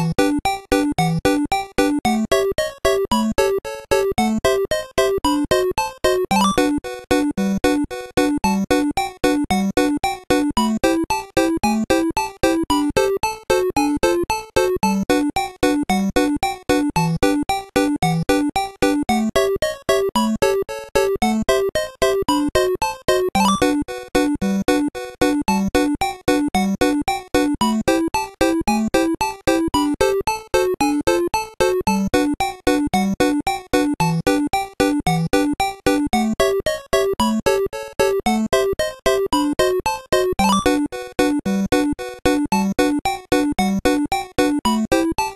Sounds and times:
Background music: 0.0s - 45.3s.

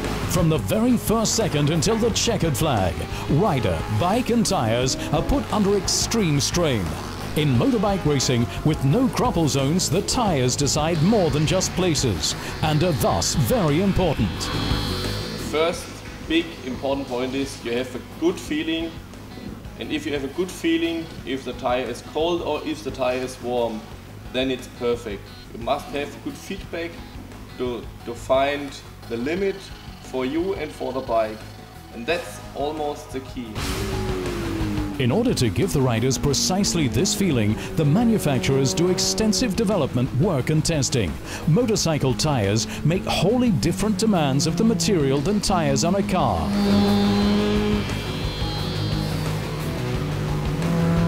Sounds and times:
Music: 0.0s - 51.0s
Speech: 0.3s - 14.5s, 15.5s - 19.0s, 19.8s - 27.0s, 27.6s - 31.4s, 32.0s - 33.6s, 35.0s - 46.6s.

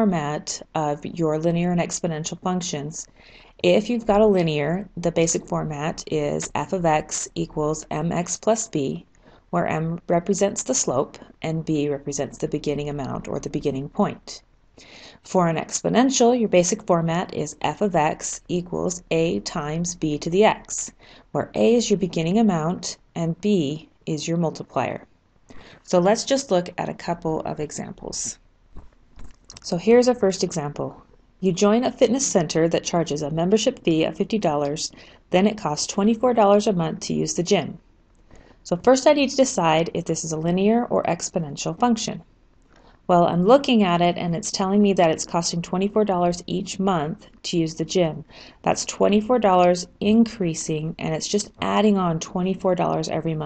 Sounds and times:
Speech: 0.0s - 14.4s, 15.2s - 25.1s, 25.8s - 28.4s, 29.5s - 37.8s, 38.7s - 42.2s, 43.1s - 53.4s.

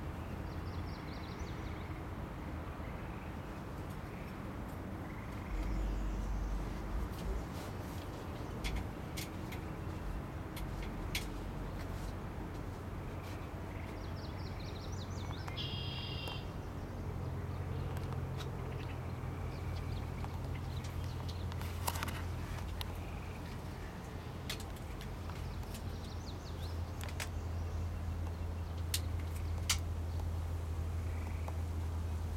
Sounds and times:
Bird: 5.0s - 10.1s, 13.1s - 29.8s.

